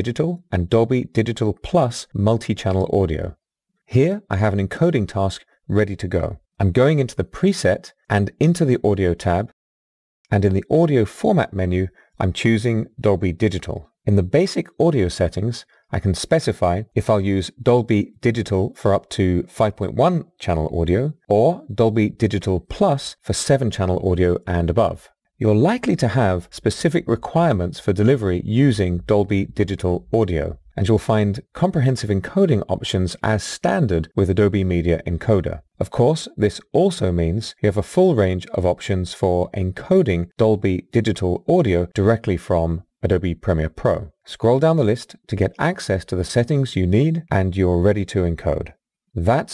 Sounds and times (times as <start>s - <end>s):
Speech: 0.0s - 9.6s, 10.3s - 49.5s.